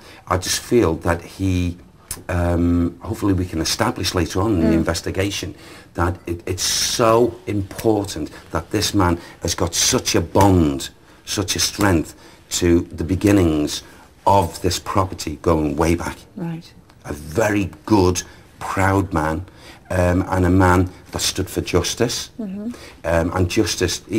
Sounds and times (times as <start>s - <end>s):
Speech: 0.3s - 24.1s.